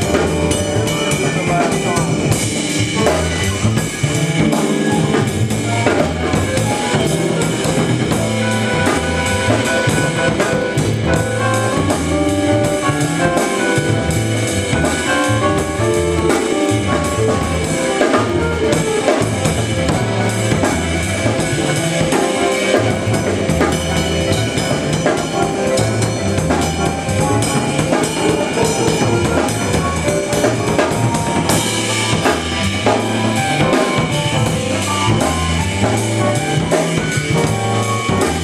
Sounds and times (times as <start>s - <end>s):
Drum: 0.0s - 38.4s
Drum kit: 0.0s - 38.4s
Jazz: 0.0s - 38.4s.